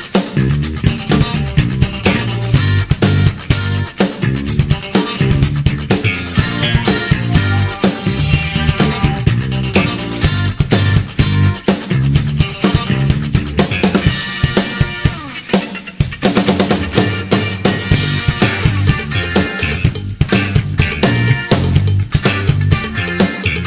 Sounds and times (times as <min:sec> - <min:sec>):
Dance music: 0:00.0 - 0:16.1, 0:16.8 - 0:23.6.